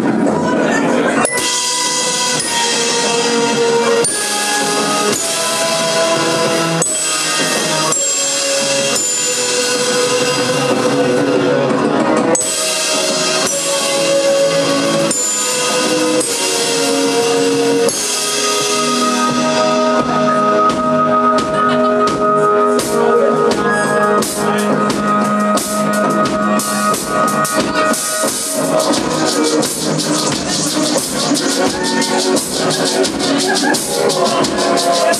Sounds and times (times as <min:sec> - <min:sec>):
Music: 0:00.0 - 0:35.1.